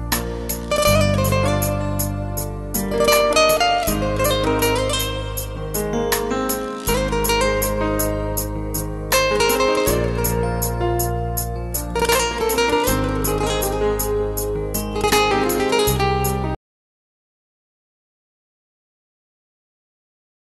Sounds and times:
Happy music: 0.0 - 16.6.

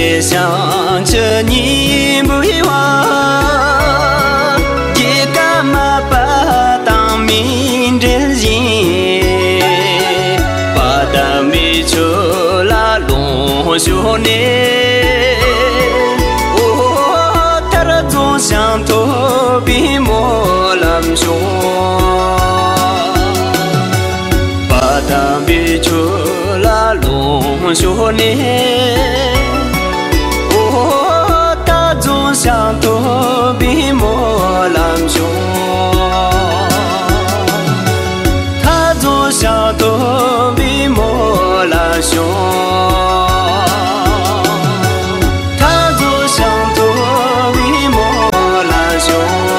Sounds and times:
Music: 0.0 - 49.5.

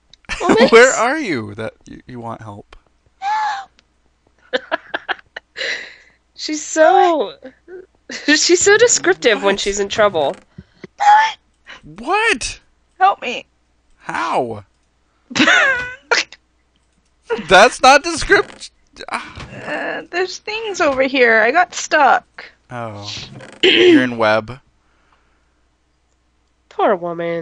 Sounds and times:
Speech: 0.3 - 2.8, 6.4 - 10.4, 11.9 - 13.4, 14.0 - 14.6, 17.3 - 24.6, 26.7 - 27.4.

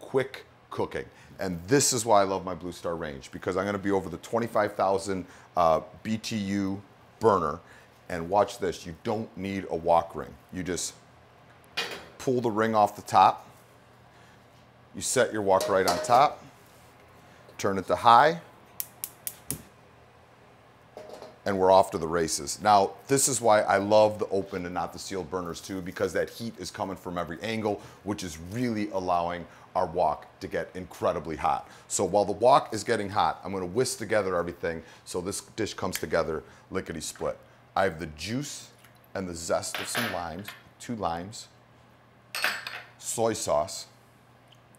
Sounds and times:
Speech: 0.0 - 11.0, 12.2 - 13.5, 15.0 - 16.4, 17.6 - 18.5, 21.4 - 41.6, 43.0 - 44.0.

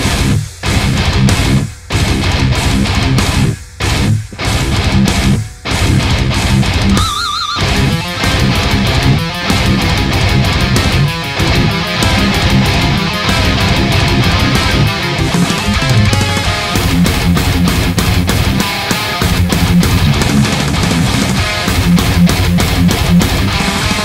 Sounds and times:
Electric guitar: 0.0 - 24.0.

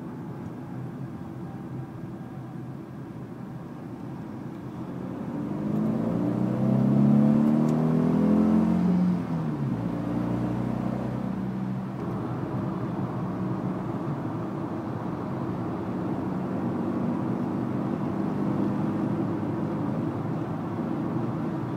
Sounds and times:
Car: 0.0 - 21.7
Accelerating, revving, vroom: 4.9 - 11.8, 15.9 - 21.4.

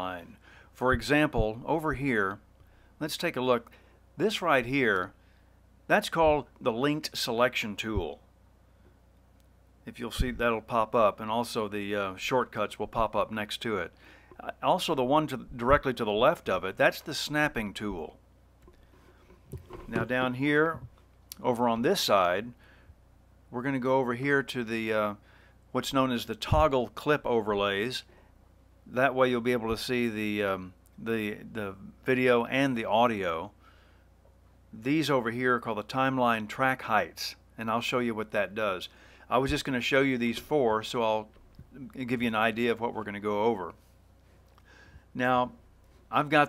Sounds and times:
Speech: 0.0 - 2.4, 3.0 - 5.2, 5.9 - 8.2, 9.8 - 18.2, 19.9 - 22.6, 23.5 - 28.1, 28.9 - 33.6, 34.7 - 43.8, 45.2 - 46.4.

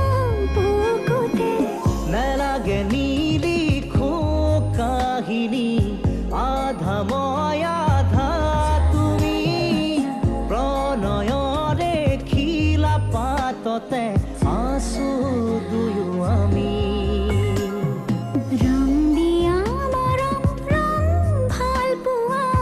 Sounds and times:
Music of Bollywood: 0.0 - 22.6.

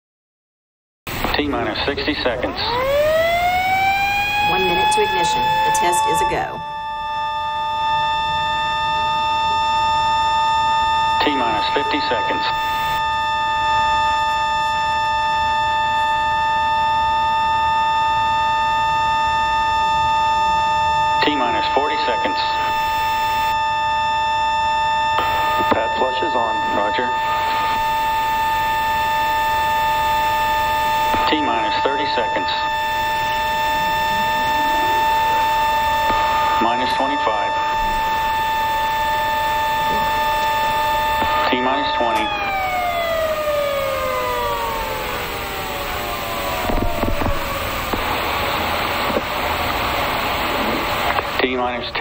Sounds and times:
Siren: 1.1 - 52.0
Speech: 1.3 - 2.8, 4.5 - 6.6, 11.2 - 12.6, 21.2 - 22.7, 25.6 - 27.6, 31.2 - 32.7, 36.6 - 37.6, 41.4 - 42.3, 51.4 - 52.0.

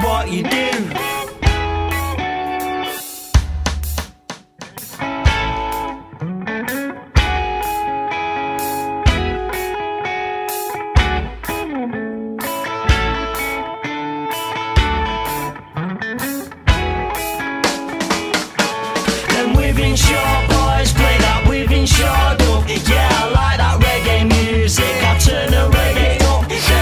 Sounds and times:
Electric guitar: 0.0 - 26.8.

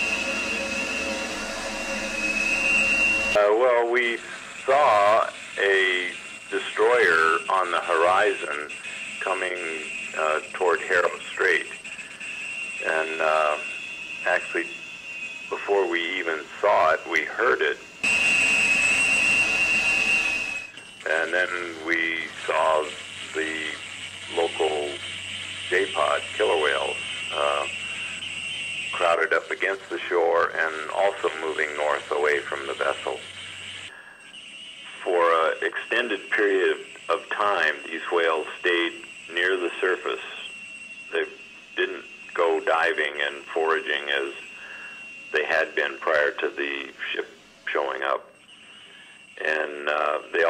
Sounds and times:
Speech: 3.4 - 11.8, 12.8 - 13.7, 14.3 - 14.8, 15.5 - 17.8, 21.1 - 25.0, 25.7 - 27.8, 29.0 - 33.2, 35.0 - 40.5, 41.1 - 44.5, 45.4 - 48.3, 49.4 - 50.5.

